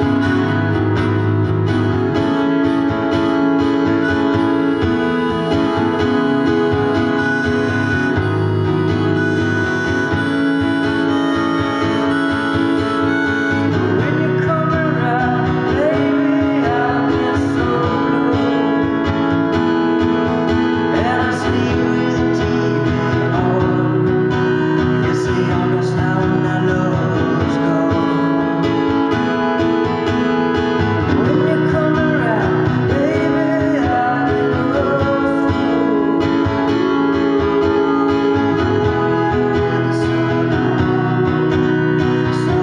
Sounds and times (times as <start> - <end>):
Bluegrass: 0.0 - 42.6
Singing: 13.8 - 19.0, 20.9 - 28.6, 31.1 - 42.6.